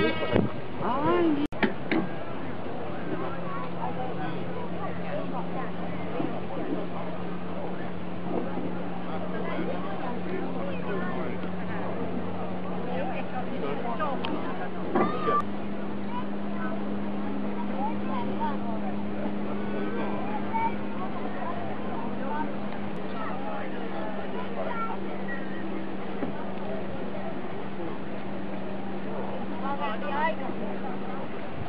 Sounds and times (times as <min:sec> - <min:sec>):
Boat, Water vehicle: 0:00.0 - 0:31.6.